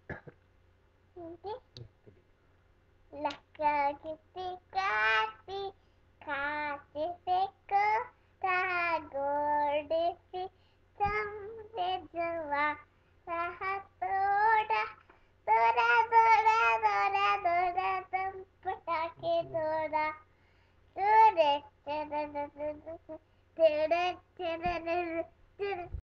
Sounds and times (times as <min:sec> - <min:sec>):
Child singing: 0:01.2 - 0:01.7, 0:03.1 - 0:20.3, 0:20.9 - 0:26.0.